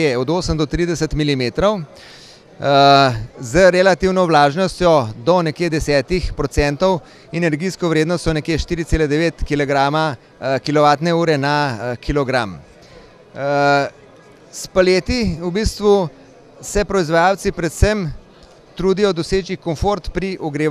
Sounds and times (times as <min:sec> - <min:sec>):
Speech: 0:00.0 - 0:01.9, 0:02.6 - 0:12.6, 0:13.4 - 0:18.2, 0:18.8 - 0:20.7.